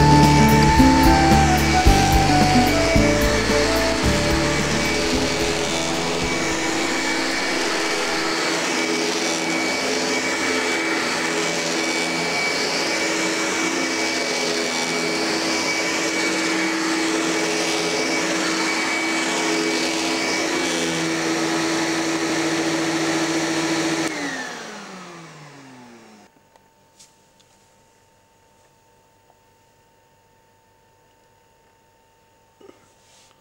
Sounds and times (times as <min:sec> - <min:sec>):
Vacuum cleaner: 0:00.0 - 0:26.3.